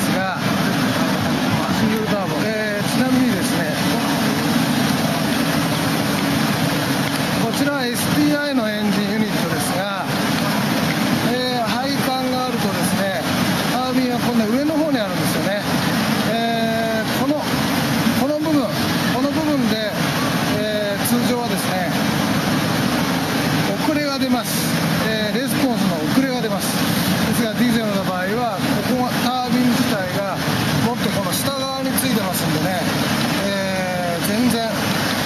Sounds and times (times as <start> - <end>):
Speech: 0.0 - 0.4, 1.6 - 4.6, 7.4 - 10.2, 11.2 - 17.5, 18.2 - 22.0, 23.7 - 34.8
Engine: 0.0 - 13.9, 14.8 - 35.2.